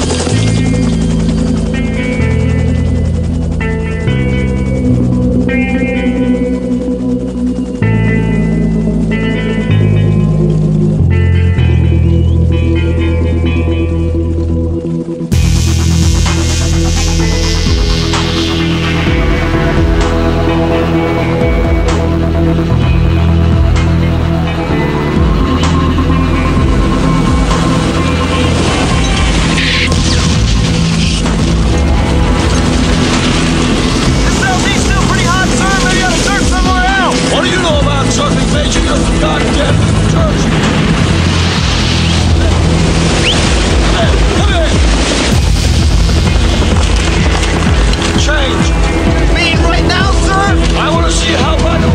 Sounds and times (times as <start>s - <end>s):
Techno: 15.3s - 51.9s.